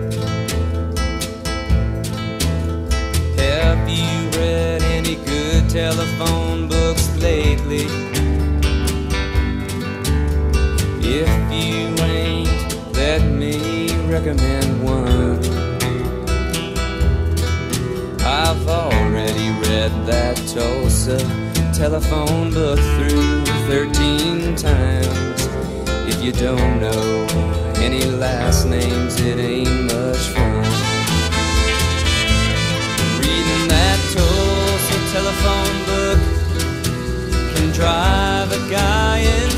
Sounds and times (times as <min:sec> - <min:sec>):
Music: 0:00.0 - 0:39.5.